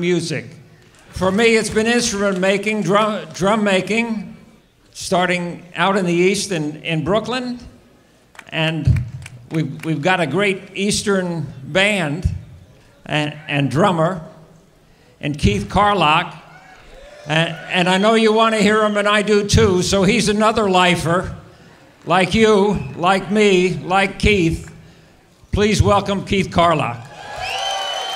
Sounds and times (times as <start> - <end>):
Speech: 0.0 - 4.3, 5.0 - 7.7, 8.5 - 12.4, 13.0 - 14.3, 15.2 - 16.4, 17.3 - 21.4, 22.0 - 24.7, 25.5 - 27.0.